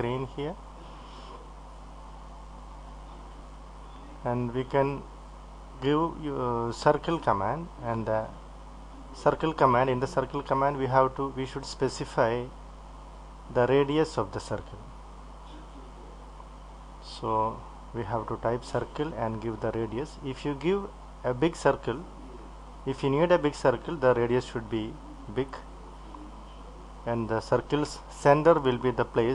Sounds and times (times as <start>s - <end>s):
Speech: 0.0s - 0.6s, 3.9s - 5.1s, 5.8s - 8.4s, 9.0s - 12.6s, 13.5s - 16.2s, 17.0s - 29.3s.